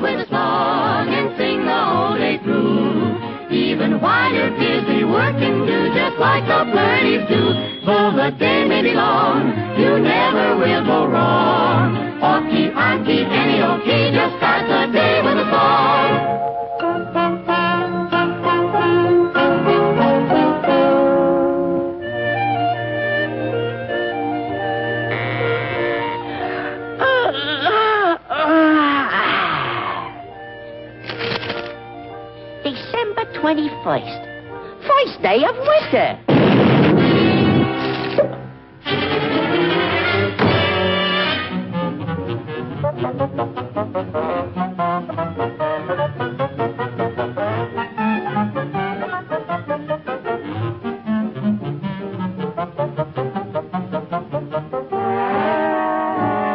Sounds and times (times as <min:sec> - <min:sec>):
Music: 0:00.0 - 0:56.5
Speech: 0:34.9 - 0:36.2.